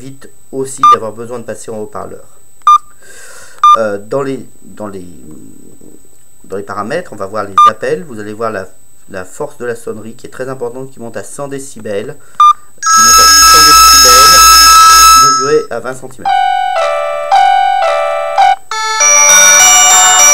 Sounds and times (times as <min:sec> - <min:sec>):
Speech: 0:00.0 - 0:02.4, 0:03.8 - 0:12.2, 0:15.2 - 0:16.4
Telephone: 0:12.8 - 0:15.7, 0:18.7 - 0:20.3.